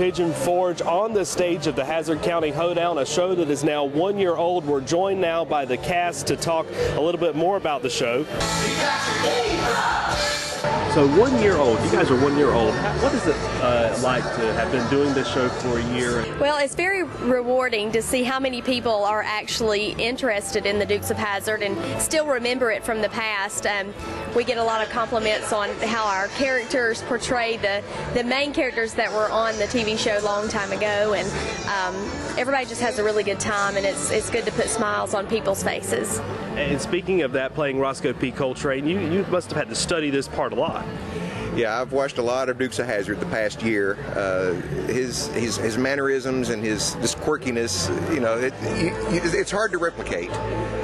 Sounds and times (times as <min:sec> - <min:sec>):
Music: 0:00.0 - 0:50.8.